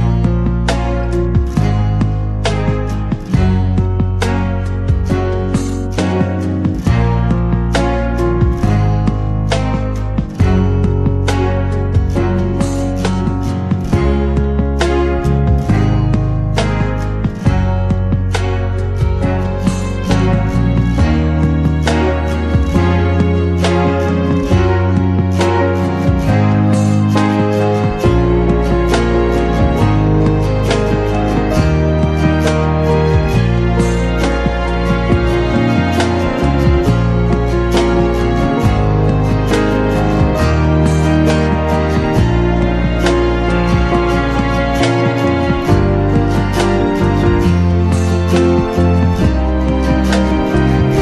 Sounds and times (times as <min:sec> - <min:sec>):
Acoustic guitar: 0:00.0 - 0:51.0
Strum: 0:00.0 - 0:51.0.